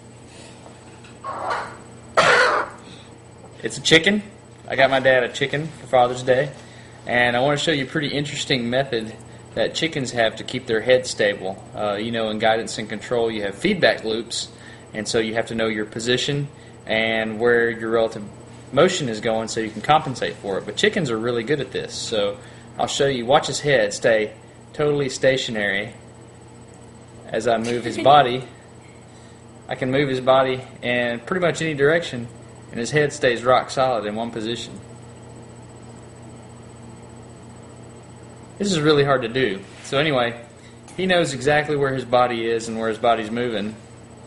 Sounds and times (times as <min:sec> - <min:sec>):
Speech: 0:03.6 - 0:26.0, 0:27.3 - 0:28.6, 0:29.7 - 0:34.9, 0:38.6 - 0:43.8.